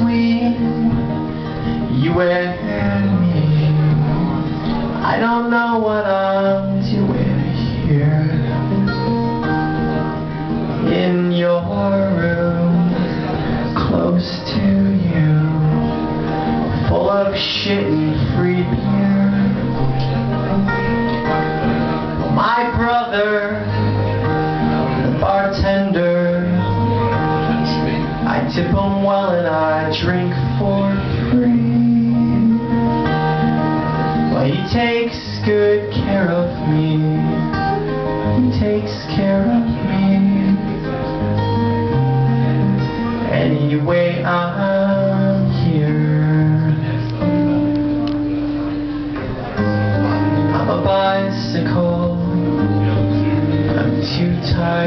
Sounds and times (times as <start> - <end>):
Music: 0.0 - 54.8.